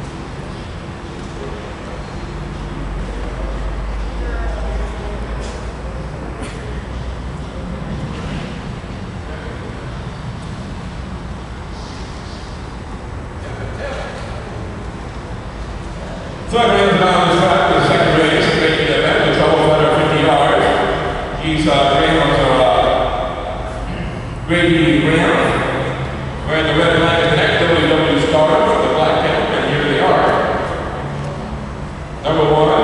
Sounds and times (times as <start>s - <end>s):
Speech: 1.3s - 6.7s, 13.4s - 14.7s, 15.9s - 30.9s, 32.2s - 32.8s.